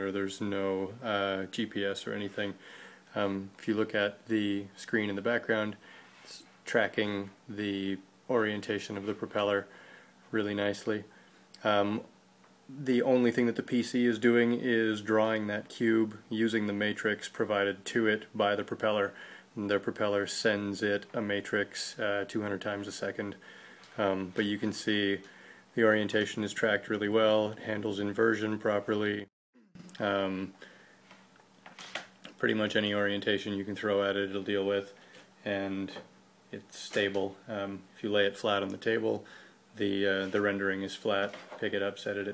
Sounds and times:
Speech: 0.0 - 9.7, 10.3 - 12.1, 12.7 - 23.4, 24.0 - 29.3, 29.9 - 30.6, 32.3 - 42.3.

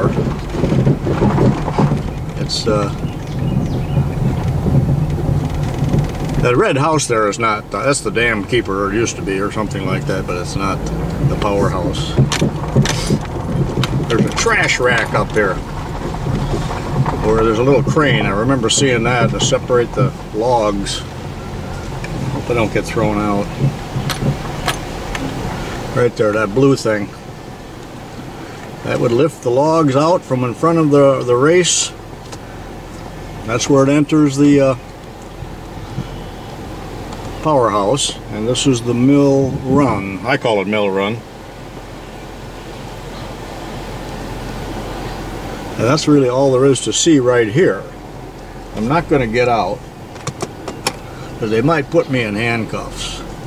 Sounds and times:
Outside, rural or natural: 0.0 - 53.4
Speech: 2.4 - 3.0, 6.4 - 12.2, 14.1 - 15.6, 17.2 - 21.1, 22.5 - 23.6, 26.0 - 27.2, 28.8 - 32.0, 33.4 - 34.8, 37.4 - 41.2, 45.8 - 48.0, 48.8 - 49.8, 51.4 - 53.3.

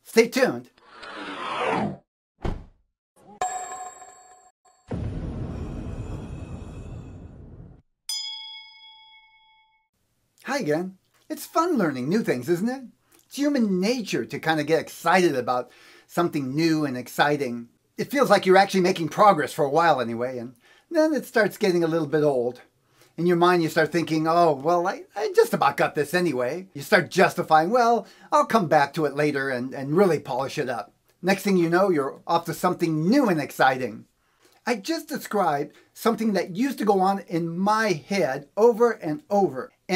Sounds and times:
Speech: 0.0 - 0.7, 10.4 - 34.1, 34.7 - 39.9.

